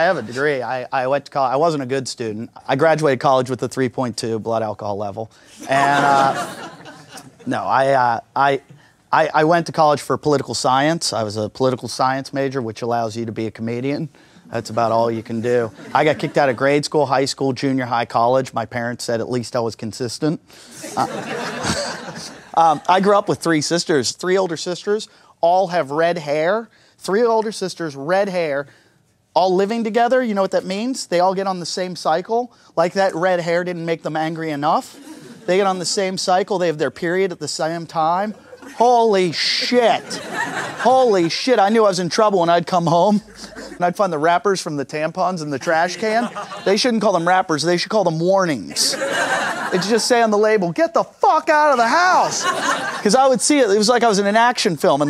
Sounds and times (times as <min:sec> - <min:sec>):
Speech: 0:00.0 - 0:06.6, 0:07.4 - 0:21.3, 0:22.2 - 0:28.7, 0:29.4 - 0:40.2, 0:40.8 - 0:49.0, 0:49.6 - 0:55.0
Laughter: 0:05.6 - 0:07.5, 0:20.7 - 0:23.0, 0:34.9 - 0:35.7, 0:38.3 - 0:39.0, 0:39.6 - 0:41.4, 0:43.2 - 0:43.9, 0:45.6 - 0:46.8, 0:48.7 - 0:50.2, 0:52.1 - 0:53.1.